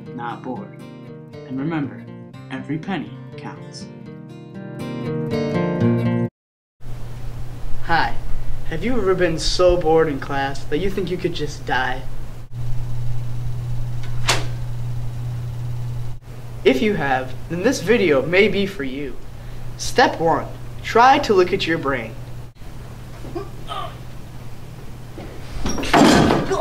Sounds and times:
Speech: 0.2s - 0.8s, 1.5s - 3.9s, 7.9s - 12.1s, 16.7s - 19.2s, 19.8s - 22.2s.

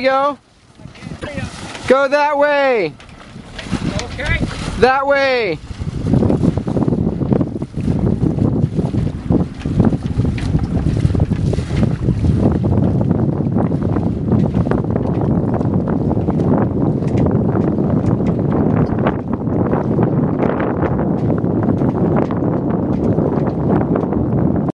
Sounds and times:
Sailboat, sailing ship: 0.0s - 24.7s.

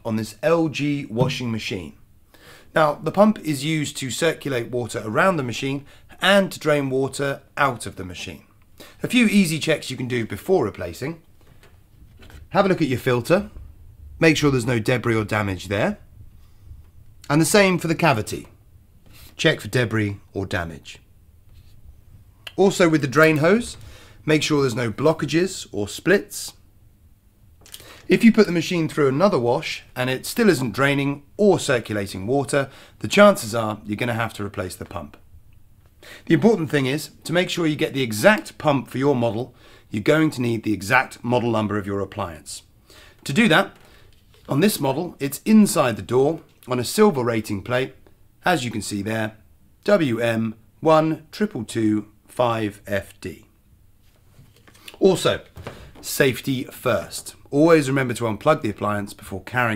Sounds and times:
Speech: 0.0s - 2.0s, 2.7s - 11.2s, 12.5s - 13.6s, 14.2s - 16.0s, 17.3s - 18.6s, 19.4s - 21.0s, 22.5s - 26.6s, 28.1s - 35.2s, 36.3s - 43.8s, 44.5s - 53.5s, 55.0s - 59.7s.

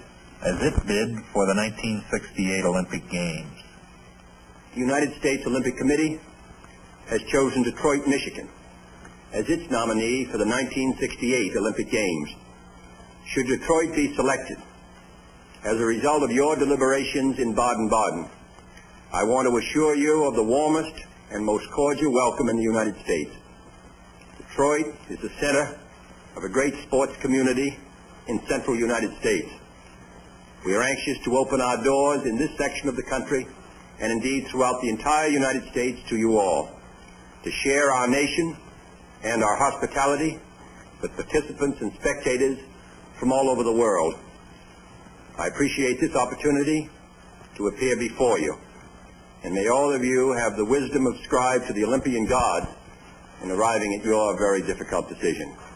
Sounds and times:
Narration, monologue: 0.0s - 55.7s
Male speech, man speaking: 0.4s - 3.6s, 4.8s - 6.2s, 7.1s - 8.6s, 9.3s - 12.4s, 13.3s - 14.6s, 15.6s - 18.3s, 19.2s - 23.4s, 24.5s - 25.8s, 26.4s - 29.6s, 30.7s - 36.8s, 37.5s - 38.6s, 39.2s - 40.4s, 41.0s - 44.2s, 45.4s - 47.0s, 47.6s - 48.6s, 49.4s - 52.8s, 53.4s - 55.6s.

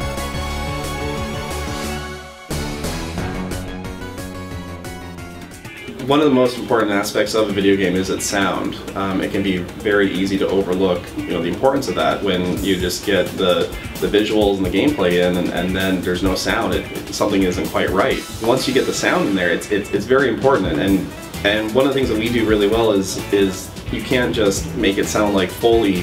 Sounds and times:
Music: 0.0s - 26.0s
Speech: 6.0s - 26.0s.

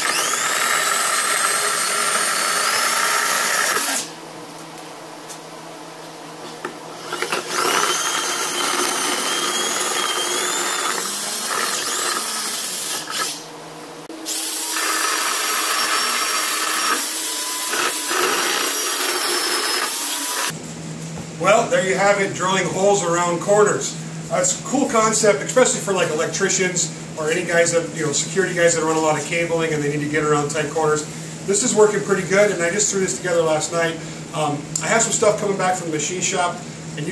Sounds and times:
Drill: 0.0s - 4.2s, 7.0s - 13.5s, 14.2s - 20.5s
Speech: 21.4s - 37.1s.

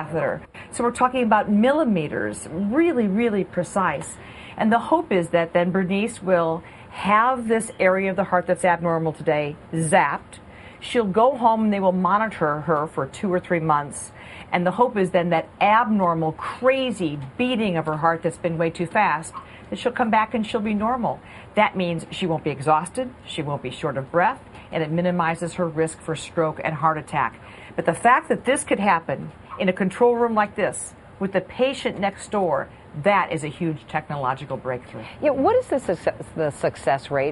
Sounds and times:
Speech: 0.0s - 37.3s.

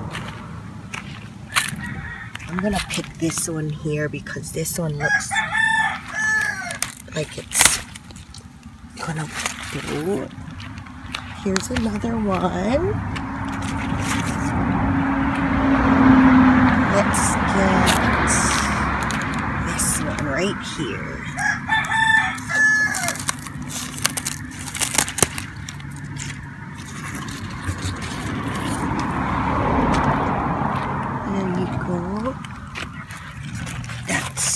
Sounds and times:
Speech: 2.5s - 5.3s, 7.1s - 7.8s, 9.0s - 10.3s, 11.4s - 13.0s, 16.9s - 18.8s, 19.6s - 21.4s, 31.2s - 32.4s, 34.1s - 34.5s.

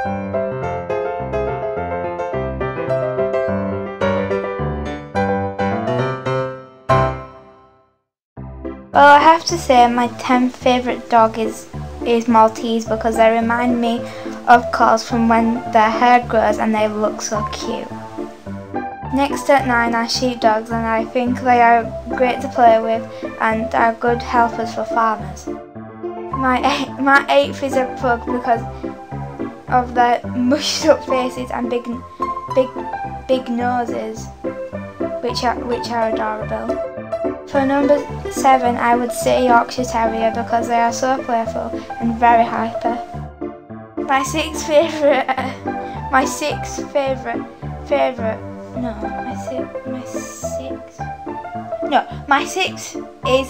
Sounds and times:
Music: 0.0s - 53.5s
Speech: 9.0s - 17.9s, 19.2s - 25.5s, 26.4s - 28.7s, 29.7s - 32.0s, 32.6s - 34.3s, 35.2s - 36.8s, 37.5s - 43.1s, 44.1s - 51.0s, 51.9s - 53.5s.

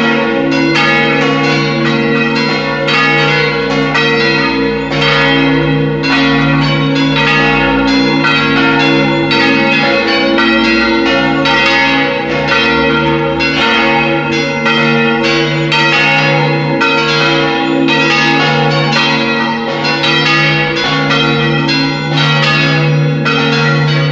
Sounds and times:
Bell: 0.0s - 24.1s.

